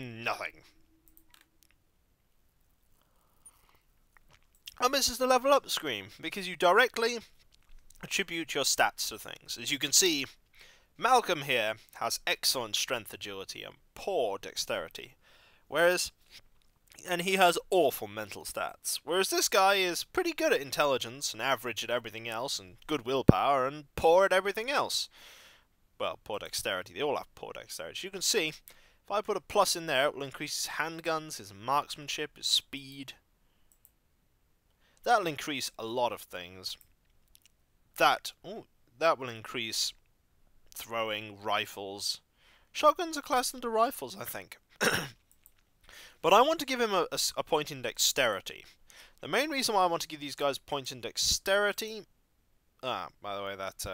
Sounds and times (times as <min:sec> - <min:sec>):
Speech: 0:00.0 - 0:00.7, 0:04.7 - 0:07.3, 0:08.0 - 0:10.4, 0:11.0 - 0:16.2, 0:17.0 - 0:25.1, 0:26.0 - 0:33.2, 0:35.0 - 0:36.8, 0:38.0 - 0:40.0, 0:40.7 - 0:44.6, 0:46.2 - 0:52.1, 0:52.8 - 0:53.9.